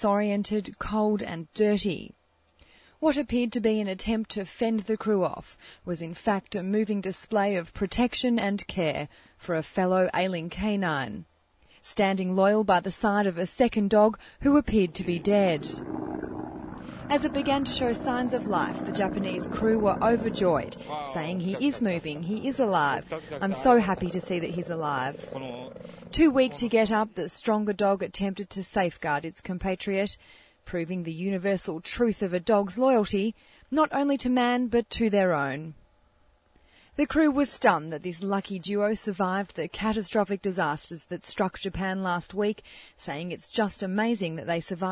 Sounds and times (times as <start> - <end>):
Speech: 0.0 - 2.2, 3.0 - 11.2, 11.9 - 15.8, 17.0 - 35.8, 37.0 - 44.9.